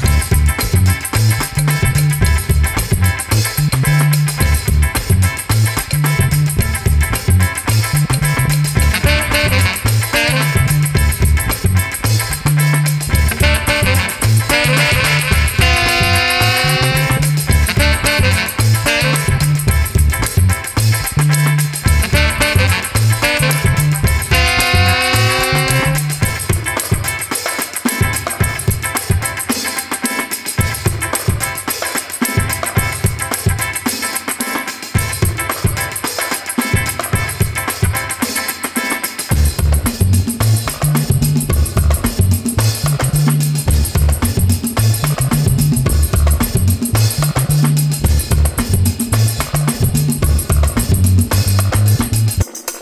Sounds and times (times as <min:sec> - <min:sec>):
Music: 0:00.0 - 0:52.8.